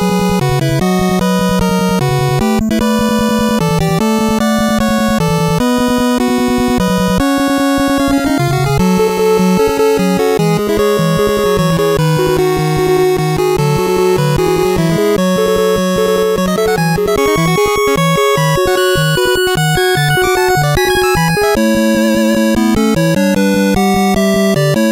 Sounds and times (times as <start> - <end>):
Video game music: 0.0 - 24.9.